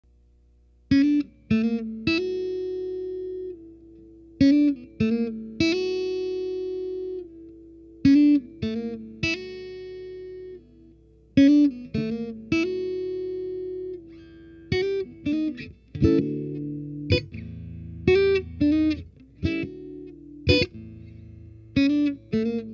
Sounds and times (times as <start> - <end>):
Inside, small room: 0.0 - 22.7.